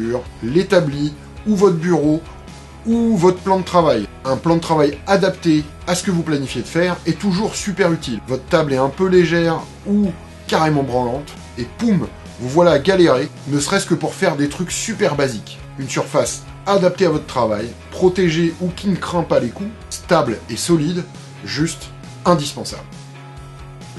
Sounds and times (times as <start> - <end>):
Speech: 0.0 - 2.3, 2.9 - 22.9
Music: 0.0 - 23.9.